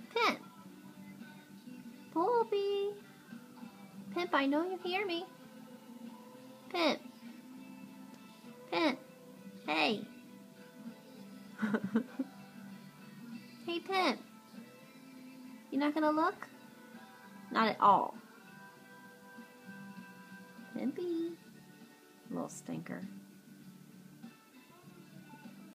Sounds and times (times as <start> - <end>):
Music: 0.0 - 25.7
Speech: 2.2 - 3.0, 9.7 - 10.1, 17.5 - 18.2, 20.8 - 21.4, 22.3 - 23.1.